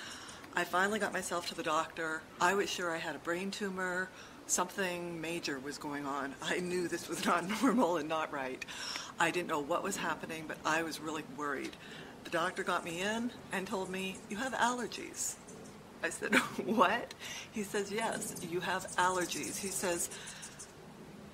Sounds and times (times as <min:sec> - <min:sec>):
Speech: 0:00.6 - 0:08.6, 0:09.2 - 0:15.4, 0:16.0 - 0:20.1.